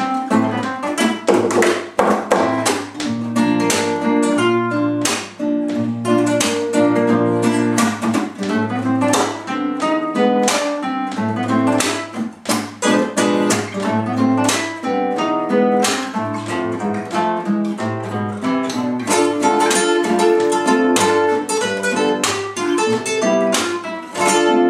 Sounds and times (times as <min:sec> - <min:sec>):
Acoustic guitar: 0:00.0 - 0:24.7
Strum: 0:00.0 - 0:24.7.